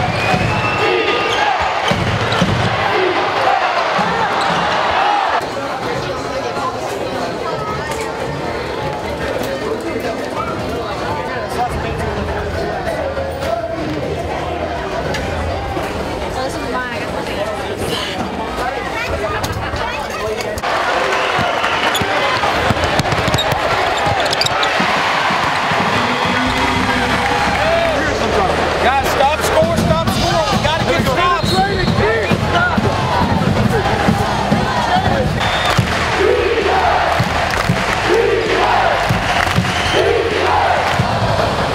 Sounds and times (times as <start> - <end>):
Music: 24.7 - 41.7
Speech: 27.9 - 32.9.